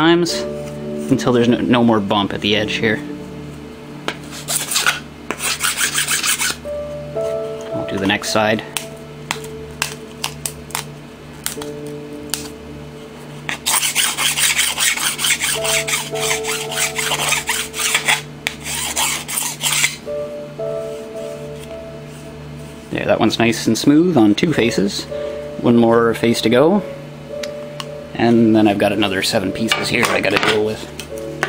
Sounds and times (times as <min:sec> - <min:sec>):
Filing (rasp): 0:04.3 - 0:06.6, 0:13.5 - 0:20.0
Rub: 0:04.3 - 0:06.6, 0:13.5 - 0:20.0.